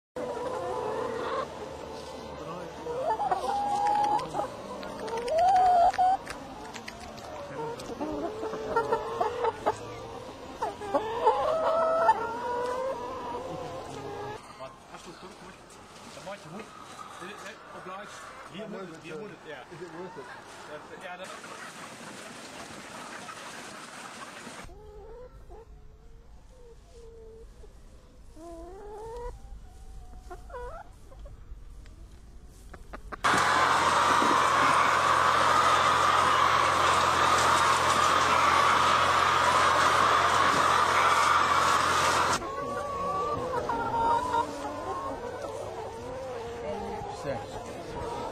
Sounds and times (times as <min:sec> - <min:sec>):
Chicken, rooster: 0:00.2 - 0:15.3, 0:16.1 - 0:31.4, 0:32.0 - 0:48.3.